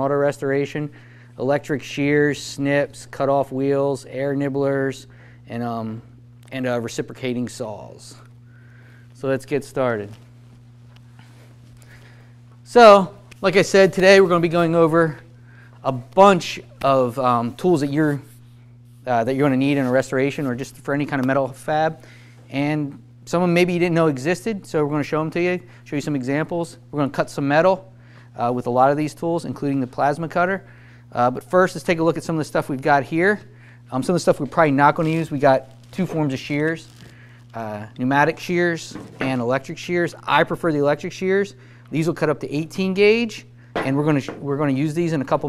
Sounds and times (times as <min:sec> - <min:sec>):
Speech: 0:00.0 - 0:08.3, 0:09.2 - 0:10.2, 0:12.7 - 0:18.3, 0:19.1 - 0:36.9, 0:37.6 - 0:45.4.